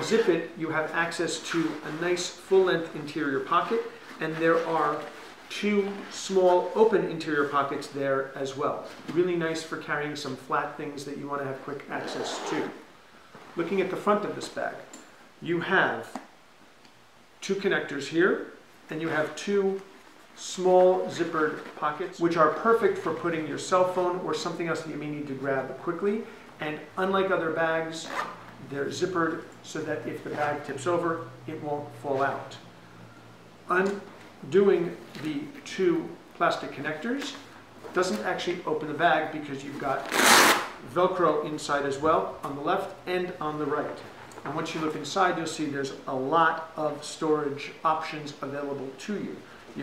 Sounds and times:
Speech: 0:00.0 - 0:12.8, 0:13.6 - 0:16.2, 0:17.4 - 0:32.7, 0:33.7 - 0:49.8.

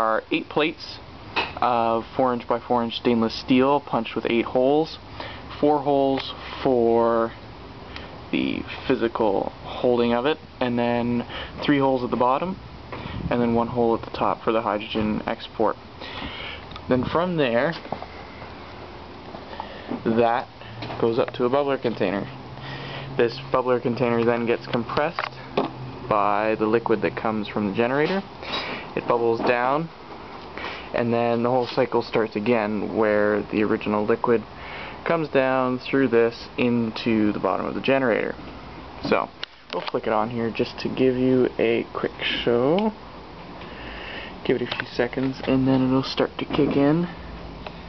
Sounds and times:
Speech: 0:00.0 - 0:01.0, 0:01.6 - 0:05.0, 0:05.6 - 0:07.4, 0:08.3 - 0:12.6, 0:13.3 - 0:15.8, 0:16.9 - 0:17.8, 0:20.0 - 0:22.4, 0:23.2 - 0:25.4, 0:26.1 - 0:28.3, 0:28.9 - 0:30.0, 0:30.9 - 0:38.4, 0:39.0 - 0:43.0, 0:44.4 - 0:47.2.

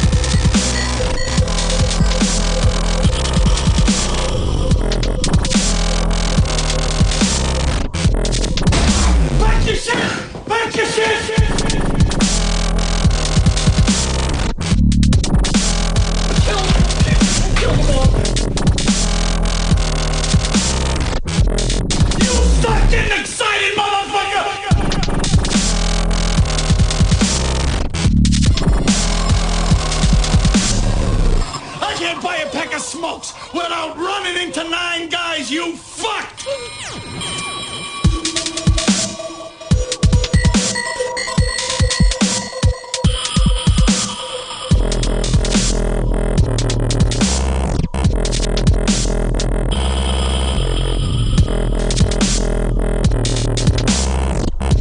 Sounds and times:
Dubstep: 0:00.0 - 0:09.9, 0:11.2 - 0:23.2, 0:24.7 - 0:33.8, 0:36.4 - 0:54.8.

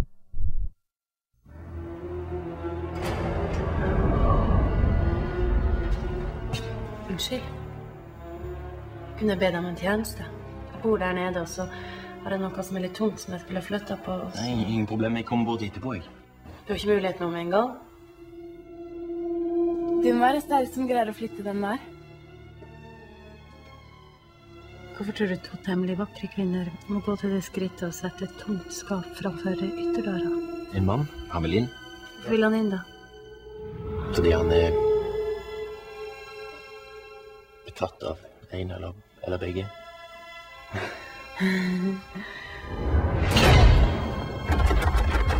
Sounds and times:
Music: 0:01.4 - 0:45.3.

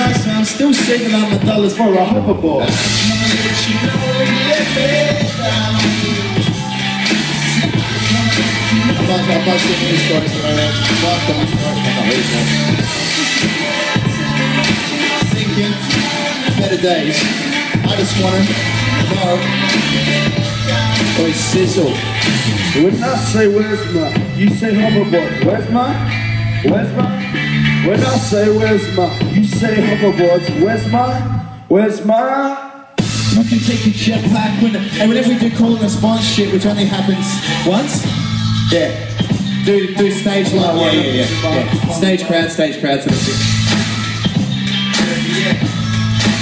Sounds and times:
Speech: 0:00.0 - 0:02.8, 0:09.0 - 0:12.6, 0:22.8 - 0:26.0, 0:27.8 - 0:32.7, 0:33.3 - 0:38.0, 0:39.7 - 0:43.4
Music: 0:00.0 - 0:46.4.

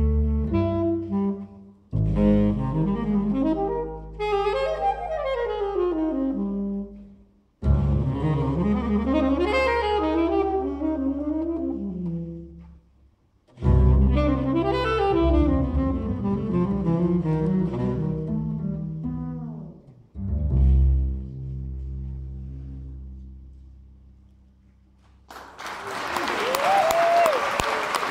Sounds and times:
Saxophone: 0:00.0 - 0:13.0, 0:13.6 - 0:20.1
Double bass: 0:00.0 - 0:25.3.

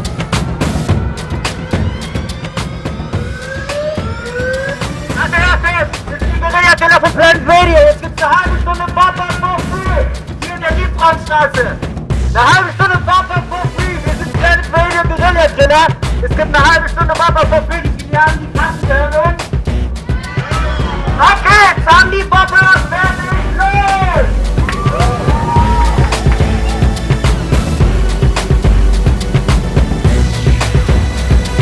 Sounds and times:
Music: 0:00.0 - 0:31.6
Speech: 0:05.2 - 0:19.4, 0:21.2 - 0:24.3.

